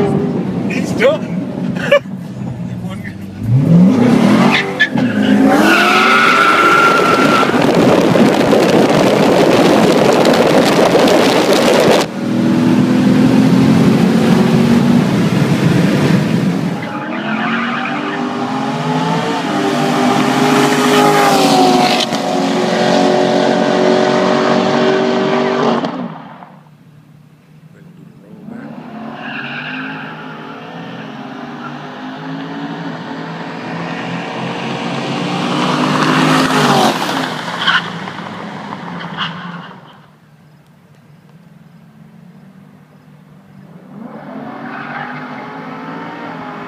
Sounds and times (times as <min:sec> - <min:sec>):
Skidding: 0:00.0 - 0:26.8, 0:27.4 - 0:46.6
Race car, auto racing: 0:00.0 - 0:46.6.